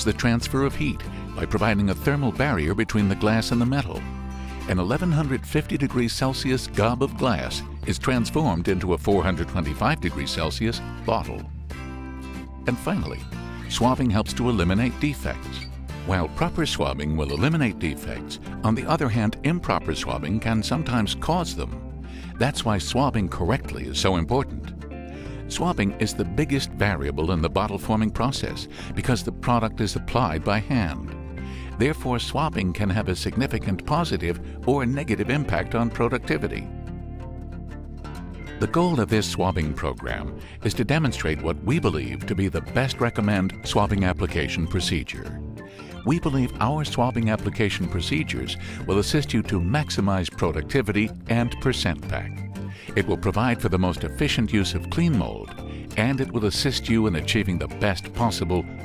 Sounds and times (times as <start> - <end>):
Speech: 0.0 - 4.0, 4.6 - 11.5, 12.7 - 24.7, 25.5 - 36.7, 38.6 - 45.4, 46.0 - 58.8
Music: 0.0 - 58.8.